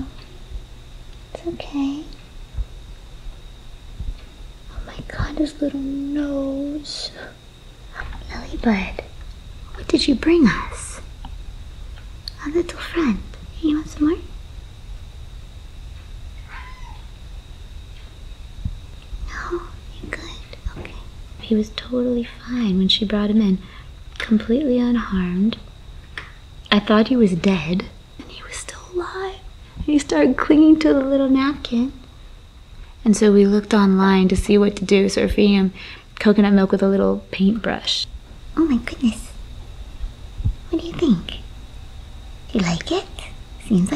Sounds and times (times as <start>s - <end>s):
Speech: 1.4s - 2.2s, 4.7s - 7.4s, 9.7s - 11.1s, 12.3s - 14.3s, 19.3s - 25.6s, 26.7s - 32.0s, 33.0s - 39.4s, 40.7s - 41.5s, 42.5s - 43.9s.